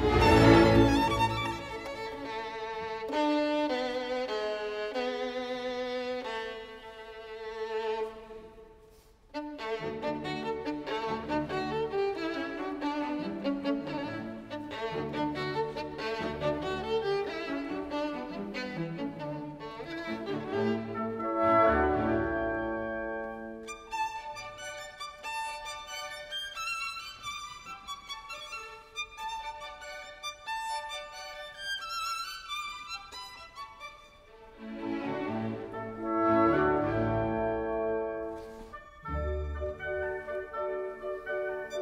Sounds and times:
Violin, fiddle: 0.0s - 41.8s.

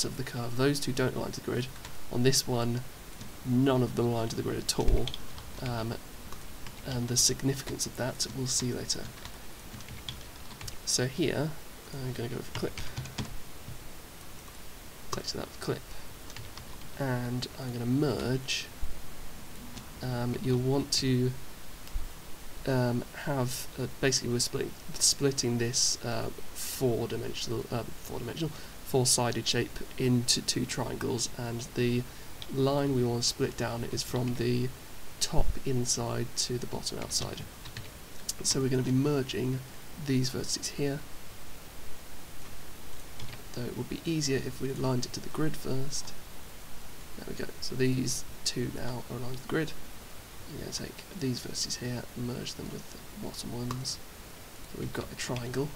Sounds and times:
Speech: 0.0s - 6.0s, 6.8s - 9.2s, 10.8s - 12.9s, 15.1s - 15.9s, 17.0s - 18.7s, 20.0s - 21.4s, 22.6s - 37.5s, 38.3s - 41.1s, 43.5s - 46.2s, 47.2s - 49.8s, 50.5s - 54.0s, 54.7s - 55.7s.

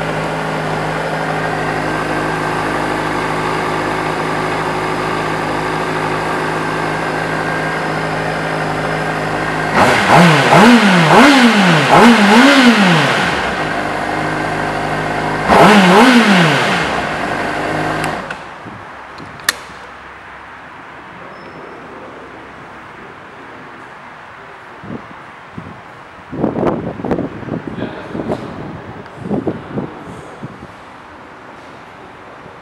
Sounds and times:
Motorcycle: 0.0s - 19.9s
Inside, large room or hall: 17.6s - 32.6s.

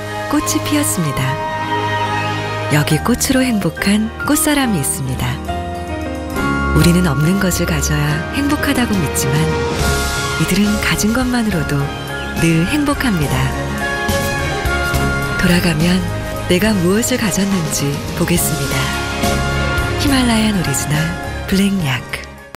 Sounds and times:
Music: 0.0s - 22.5s
Speech: 0.3s - 1.4s, 2.7s - 5.5s, 6.8s - 9.6s, 10.4s - 13.6s, 15.4s - 19.0s, 20.0s - 22.3s.

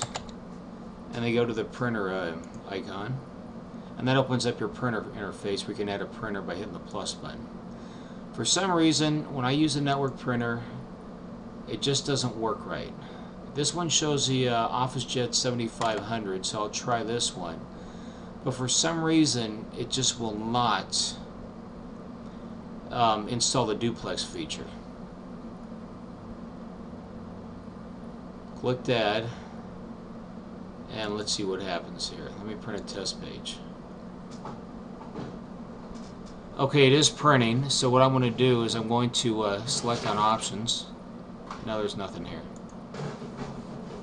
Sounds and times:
Speech: 1.1s - 3.2s, 4.0s - 7.5s, 8.4s - 10.8s, 11.7s - 13.0s, 13.6s - 17.6s, 18.4s - 21.3s, 22.9s - 24.8s, 28.6s - 29.4s, 30.9s - 33.7s, 36.6s - 41.0s, 41.6s - 42.6s.

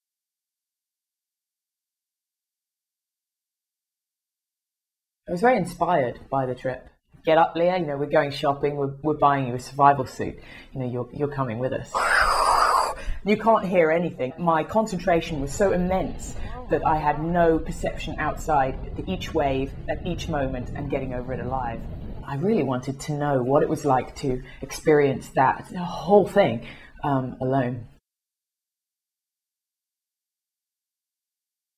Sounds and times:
Speech: 5.3s - 12.1s, 13.2s - 27.9s.

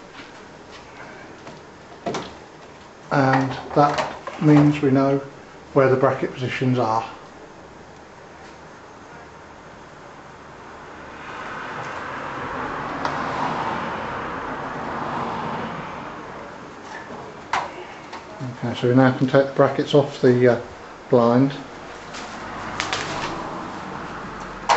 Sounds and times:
Speech: 3.1s - 7.2s, 18.3s - 21.7s.

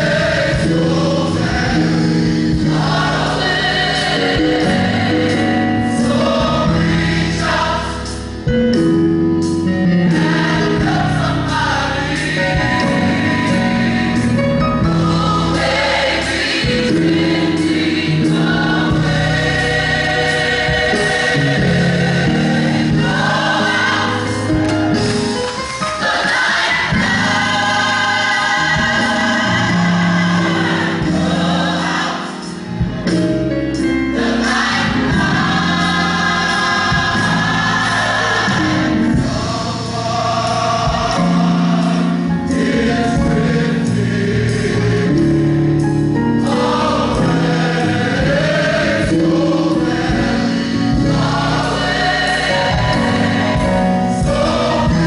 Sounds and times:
Choir: 0.0s - 8.6s, 9.6s - 55.0s
Gospel music: 0.0s - 55.0s
Music of Latin America: 0.0s - 55.0s.

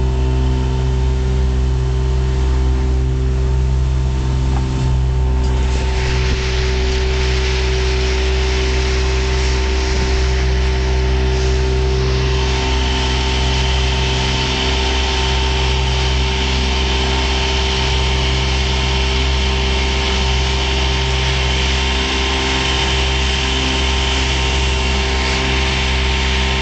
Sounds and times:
Motorboat, speedboat: 0.0s - 26.6s.

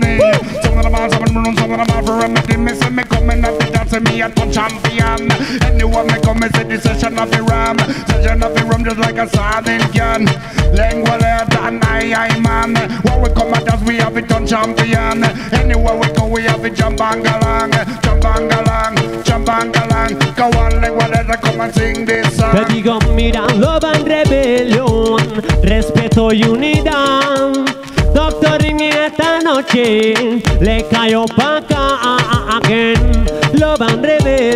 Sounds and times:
Music: 0.0s - 34.5s.

